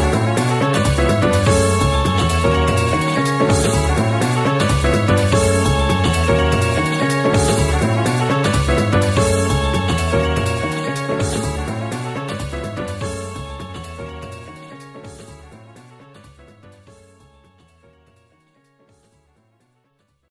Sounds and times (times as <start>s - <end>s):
Theme music: 0.0s - 17.8s.